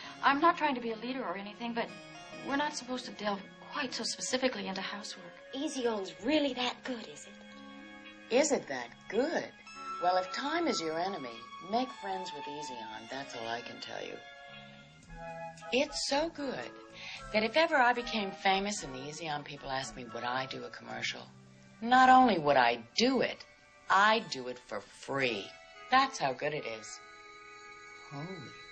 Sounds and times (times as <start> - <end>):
Music: 0.0 - 28.7
Speech: 0.2 - 7.4, 8.3 - 14.2, 15.8 - 27.0, 28.1 - 28.6.